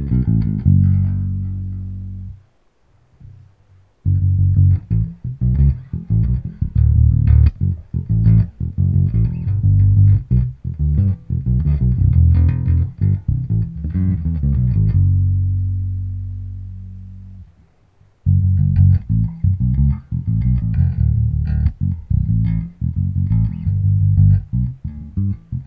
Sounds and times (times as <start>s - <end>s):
Bass guitar: 0.0s - 2.5s, 3.2s - 25.6s.